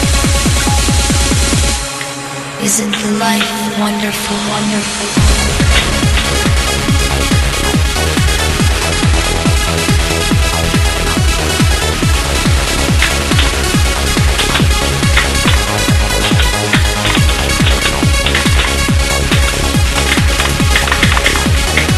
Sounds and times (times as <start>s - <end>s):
Music: 0.0s - 21.9s.